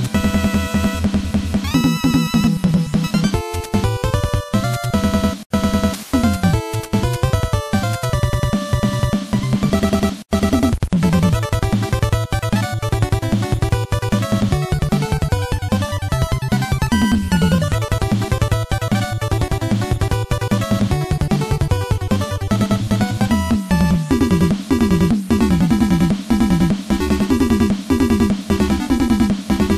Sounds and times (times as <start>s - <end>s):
Background music: 0.0s - 29.7s
Rhythm and blues: 0.1s - 29.7s.